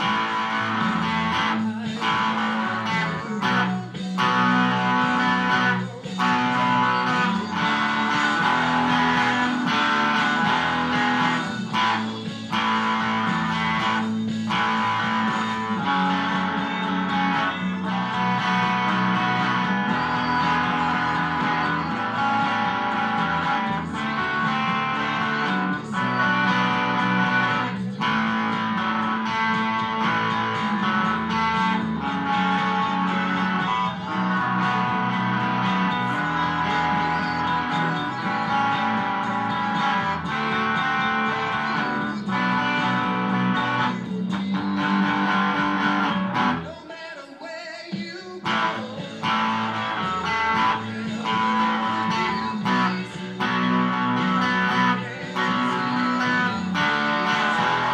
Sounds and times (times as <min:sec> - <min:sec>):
Strum: 0:00.0 - 0:46.8, 0:48.5 - 0:57.9
Electric guitar: 0:00.0 - 0:46.9, 0:47.9 - 0:57.9.